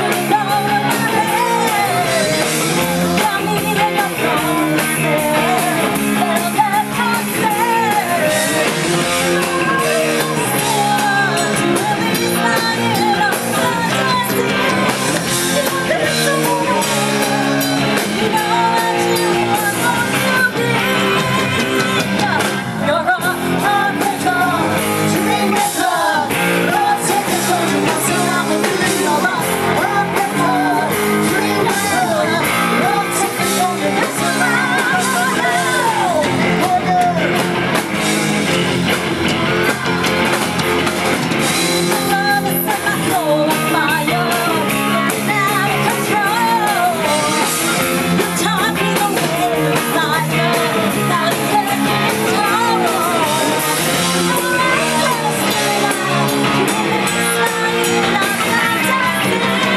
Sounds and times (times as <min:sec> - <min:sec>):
Female singing: 0:00.0 - 0:37.3, 0:41.8 - 0:59.7
Music: 0:00.0 - 0:59.7.